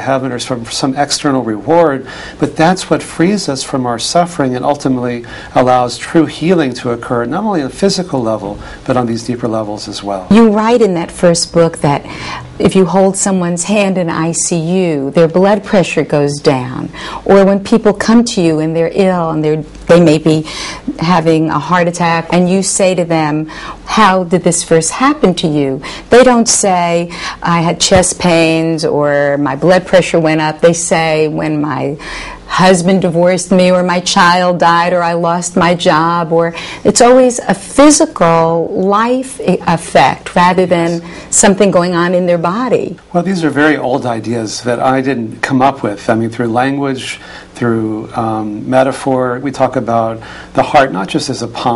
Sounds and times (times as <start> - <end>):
Conversation: 0.0 - 51.7.